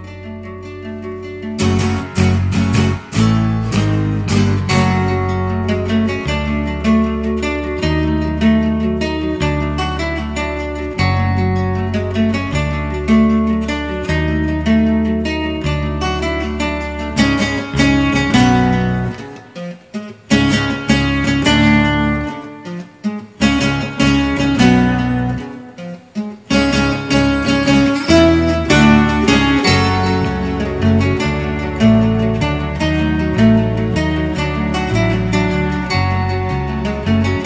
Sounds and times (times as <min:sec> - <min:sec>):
Guitar: 0:00.0 - 0:37.4.